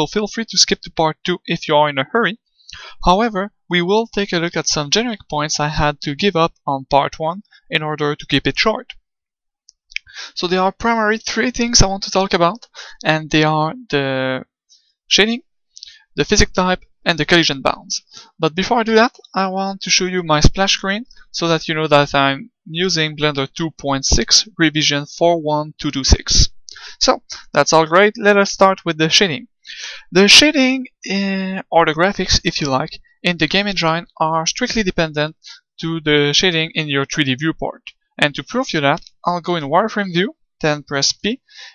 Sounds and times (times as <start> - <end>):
Speech: 0.0 - 9.0, 10.0 - 14.5, 15.1 - 41.7.